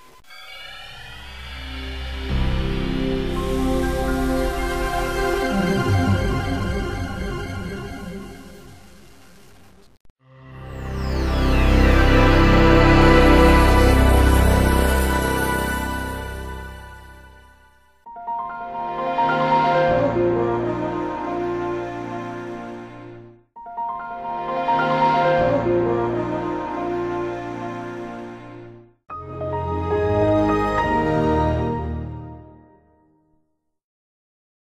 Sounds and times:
Music: 0:00.0 - 0:33.8.

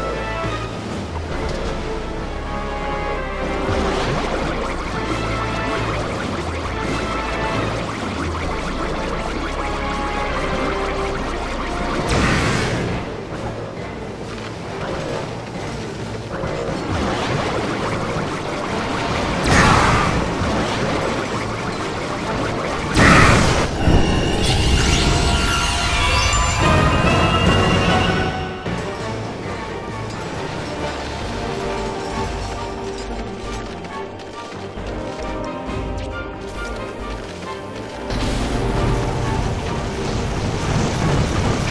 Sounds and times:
Music: 0:00.0 - 0:41.7.

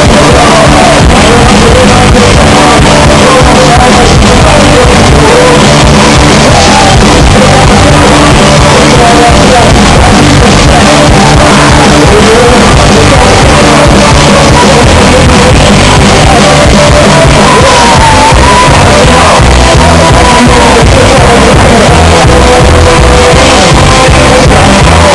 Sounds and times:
Punk rock: 0:00.0 - 0:25.1.

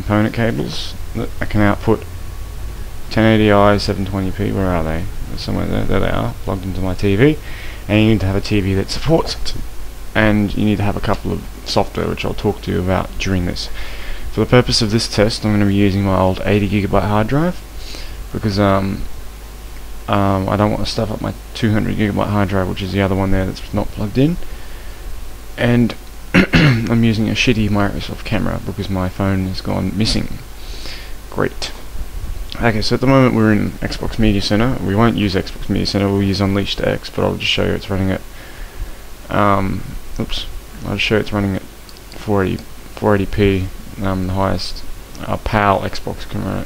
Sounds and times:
Speech: 0:00.0 - 0:02.1, 0:03.1 - 0:09.6, 0:10.2 - 0:17.6, 0:18.3 - 0:19.1, 0:20.1 - 0:24.4, 0:25.6 - 0:30.5, 0:31.3 - 0:31.9, 0:32.5 - 0:38.3, 0:39.3 - 0:46.6.

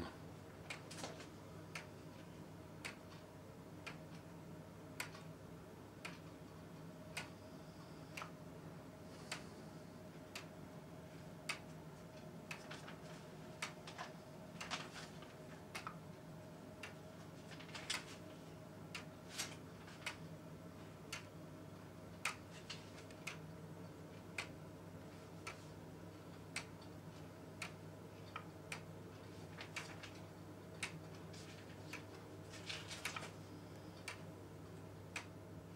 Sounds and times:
Tick-tock: 0:02.8 - 0:04.3, 0:27.6 - 0:28.9.

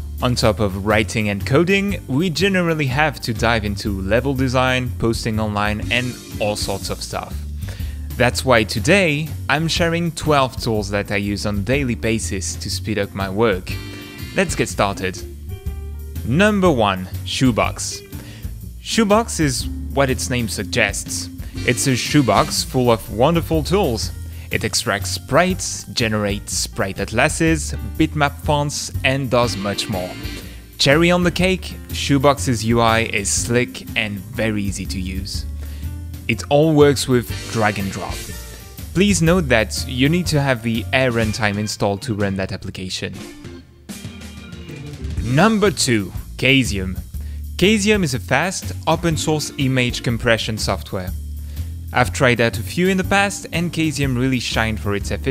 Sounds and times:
Music: 0:00.0 - 0:55.3
Speech: 0:00.2 - 0:07.4, 0:08.2 - 0:13.8, 0:14.4 - 0:15.3, 0:16.2 - 0:18.1, 0:18.8 - 0:30.2, 0:30.8 - 0:35.5, 0:36.3 - 0:38.4, 0:39.0 - 0:43.2, 0:45.2 - 0:51.2, 0:52.0 - 0:55.3.

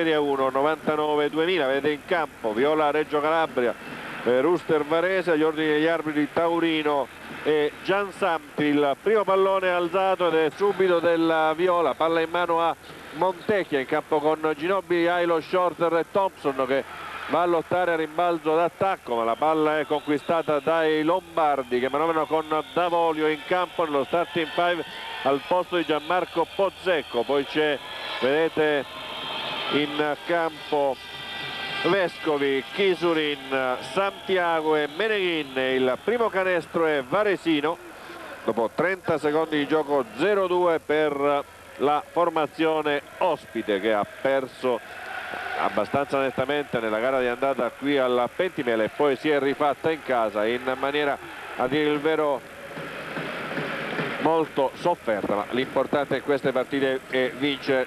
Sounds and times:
Speech: 0:00.0 - 0:28.8, 0:29.7 - 0:31.0, 0:31.8 - 0:44.8, 0:45.6 - 0:52.4, 0:54.2 - 0:57.8.

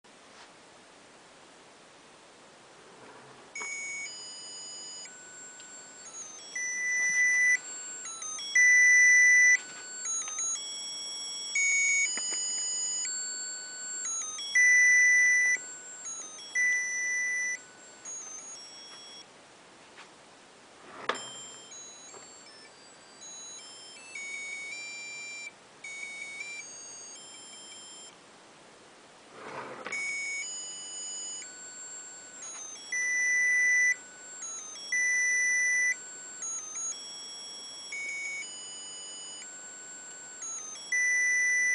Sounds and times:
Rustle: 0:00.1 - 0:03.6.

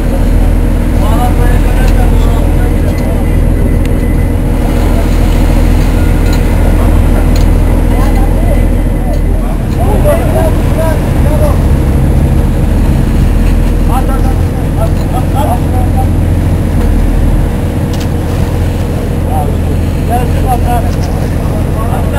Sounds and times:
Speech: 0:00.0 - 0:03.4, 0:06.6 - 0:11.8, 0:13.8 - 0:16.2, 0:19.2 - 0:22.1
Motorboat, speedboat: 0:00.0 - 0:22.1.

